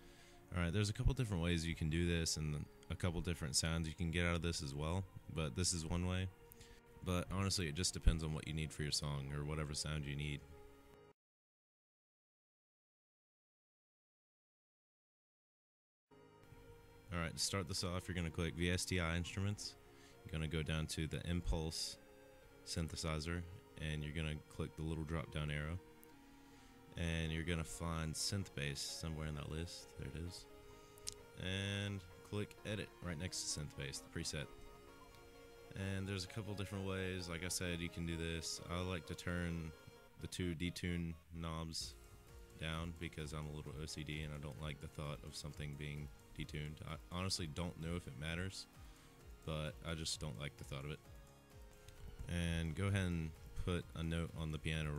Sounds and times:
Speech: 0.5 - 6.3, 7.0 - 10.4, 17.1 - 22.0, 22.7 - 25.8, 27.0 - 30.5, 31.4 - 34.5, 35.8 - 42.0, 42.6 - 48.7, 49.4 - 51.0, 52.3 - 54.9.

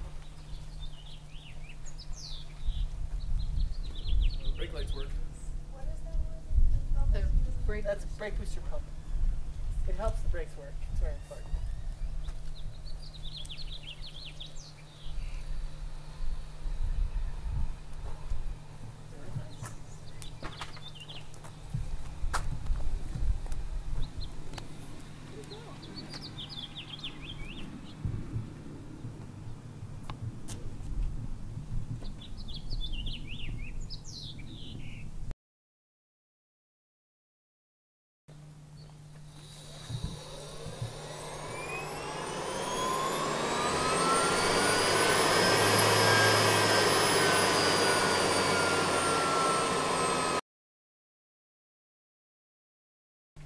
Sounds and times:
Chirp, tweet: 0.1 - 5.5, 11.2 - 15.8, 19.5 - 21.3, 25.8 - 28.0, 32.0 - 35.1.

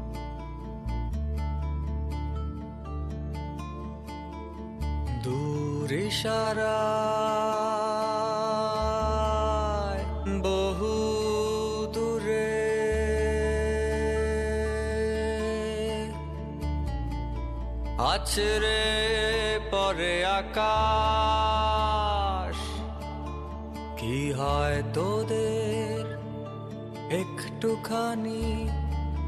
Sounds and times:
Music: 0.0 - 29.2.

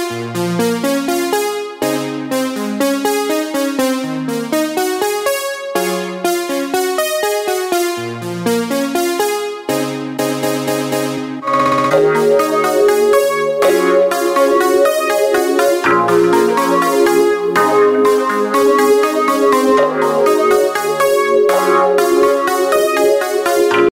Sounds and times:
Music: 0.0 - 23.9.

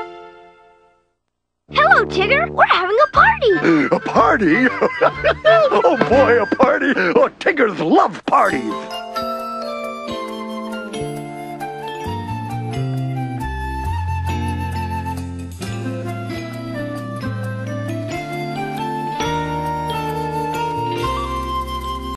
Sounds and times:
Music: 0.0 - 6.8, 8.5 - 22.1.

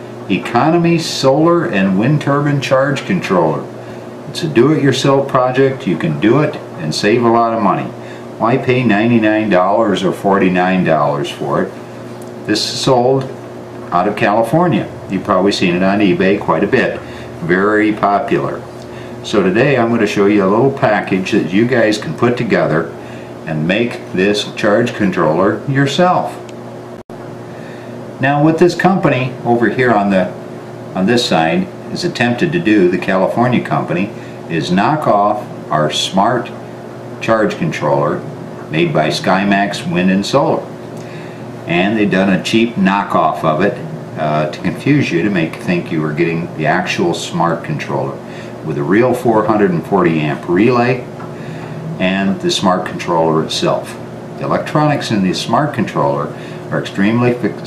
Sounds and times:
Speech: 0.3 - 11.8, 12.5 - 26.5, 28.2 - 30.4, 31.0 - 36.6, 37.2 - 40.7, 41.7 - 51.1, 52.0 - 57.6.

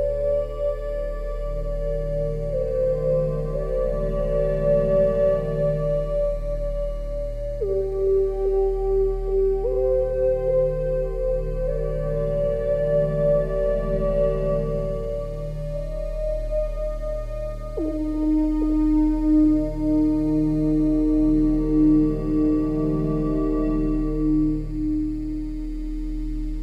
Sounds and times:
Synthesizer: 0.0 - 26.6.

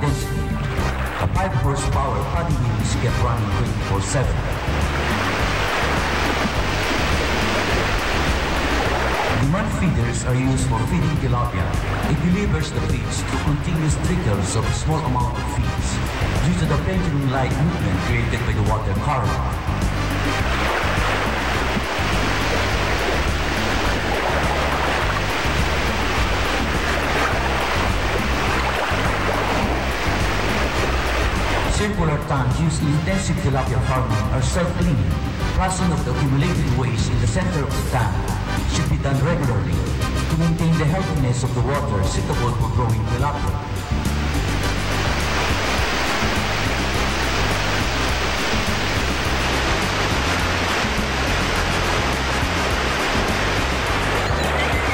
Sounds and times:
Waterfall: 0.0 - 39.0, 42.0 - 54.9.

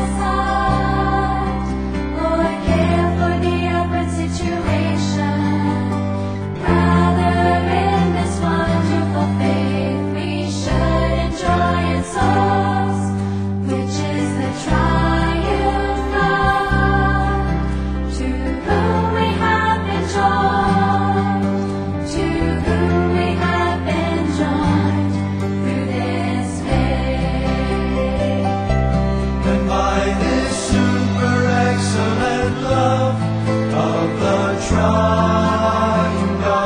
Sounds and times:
Music: 0.0 - 36.6.

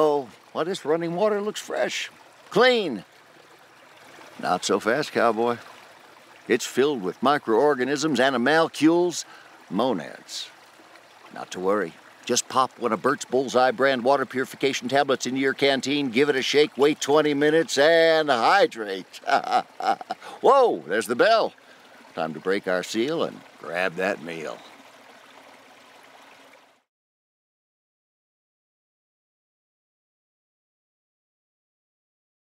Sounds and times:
Speech: 0.0 - 3.0, 4.4 - 5.6, 6.5 - 10.5, 11.3 - 19.6, 20.4 - 21.6, 22.2 - 24.7
Stream: 0.0 - 26.9.

